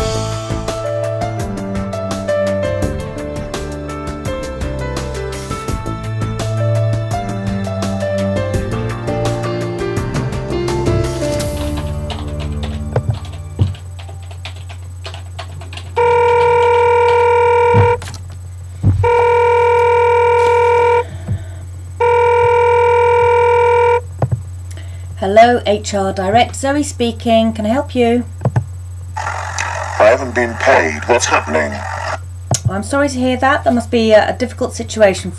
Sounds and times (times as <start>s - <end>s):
Telephone bell ringing: 16.0s - 18.0s, 19.0s - 21.0s, 22.0s - 24.0s.